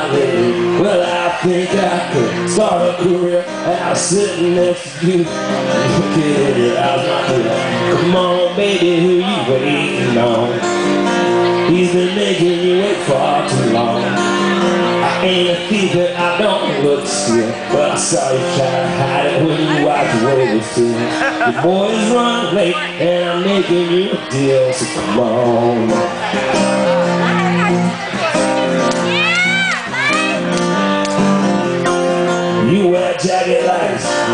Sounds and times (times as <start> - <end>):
Music: 0.0 - 34.3
Speech: 11.6 - 26.4.